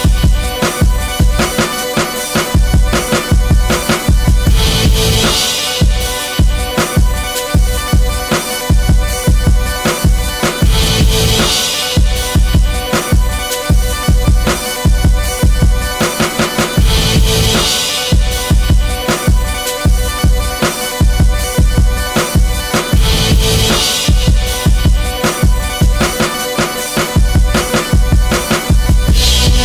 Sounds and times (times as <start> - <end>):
Dance music: 0.0 - 29.6.